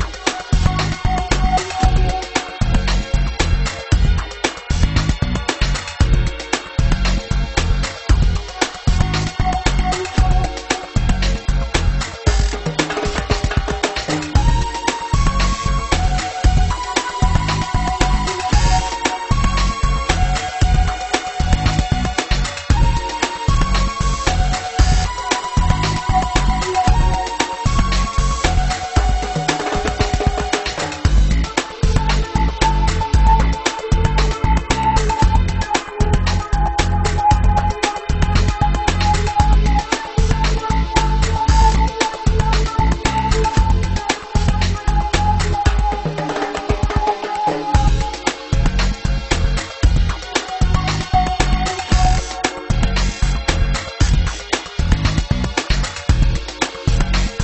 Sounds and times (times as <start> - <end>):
Music: 0.0 - 57.4.